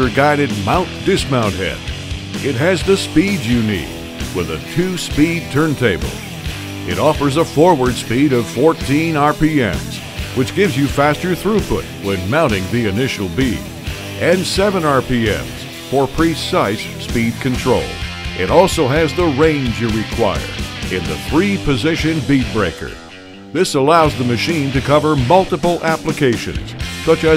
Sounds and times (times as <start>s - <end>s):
Speech: 0.0s - 1.8s, 2.4s - 6.2s, 6.9s - 23.0s, 23.6s - 27.3s
Music: 0.0s - 27.3s.